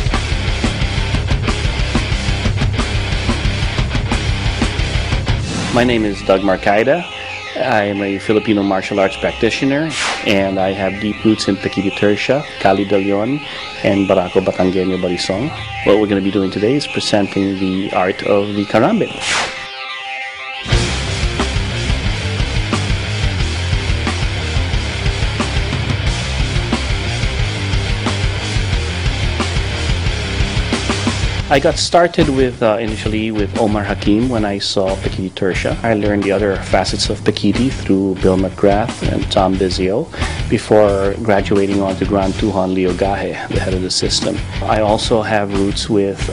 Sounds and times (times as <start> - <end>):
Music: 0.0 - 46.3.